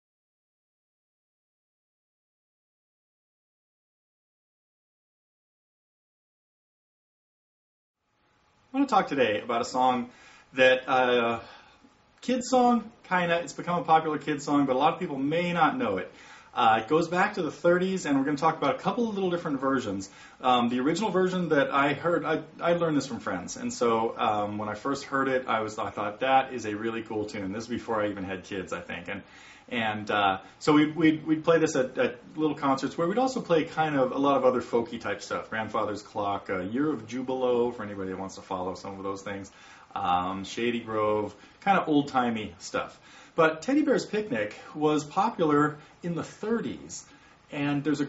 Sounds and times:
Speech: 0:08.7 - 0:11.6, 0:12.2 - 0:48.0.

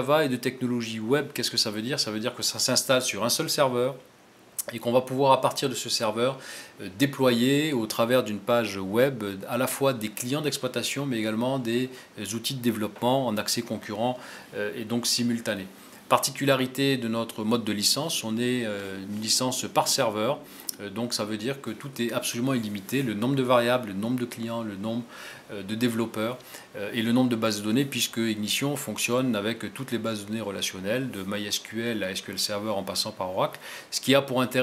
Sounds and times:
Speech: 0:00.0 - 0:34.6.

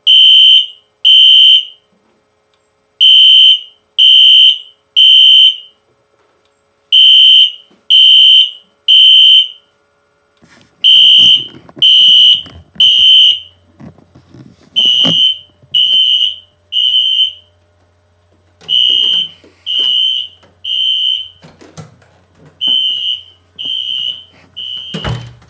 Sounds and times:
Buzzer: 0:00.0 - 0:01.9, 0:03.0 - 0:05.8, 0:06.9 - 0:09.7, 0:10.8 - 0:13.6, 0:14.8 - 0:17.5, 0:18.6 - 0:21.5, 0:22.6 - 0:25.4
Smoke detector, smoke alarm: 0:00.0 - 0:01.9, 0:03.0 - 0:05.8, 0:06.9 - 0:09.8, 0:10.8 - 0:13.6, 0:14.8 - 0:17.6, 0:18.6 - 0:21.5, 0:22.6 - 0:25.4.

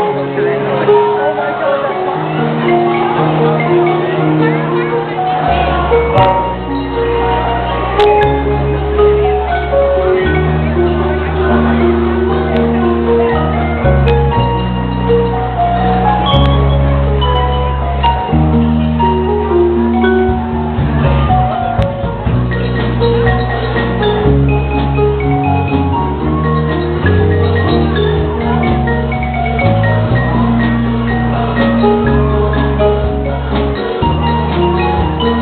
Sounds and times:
Percussion: 0:00.0 - 0:35.4.

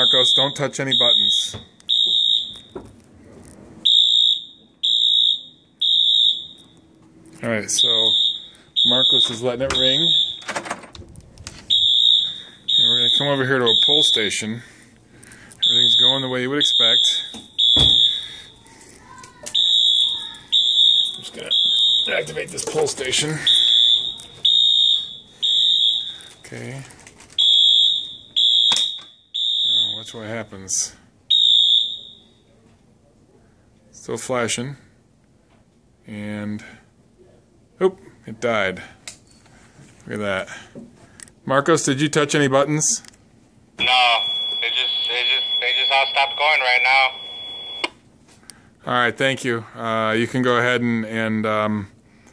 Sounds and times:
Fire alarm: 0:00.0 - 0:02.9, 0:03.8 - 0:06.8, 0:07.7 - 0:10.8, 0:11.7 - 0:14.4, 0:15.6 - 0:18.7, 0:19.5 - 0:26.8, 0:27.4 - 0:30.4, 0:31.3 - 0:32.5, 0:43.8 - 0:48.0.

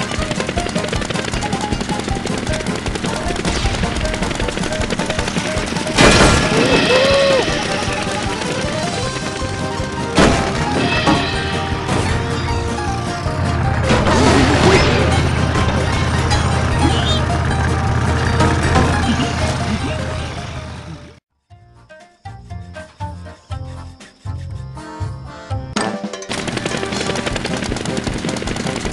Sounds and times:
Helicopter: 0:00.0 - 0:21.2, 0:26.3 - 0:28.9
Music: 0:00.0 - 0:28.9.

